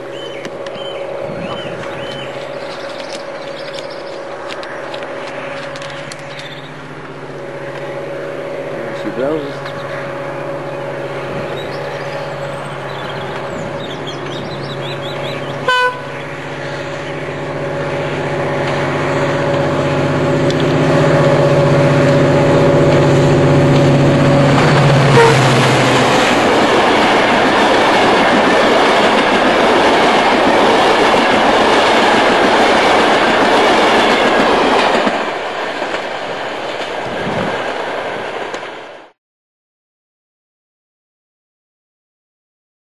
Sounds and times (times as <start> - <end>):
Vehicle: 0.0 - 27.4.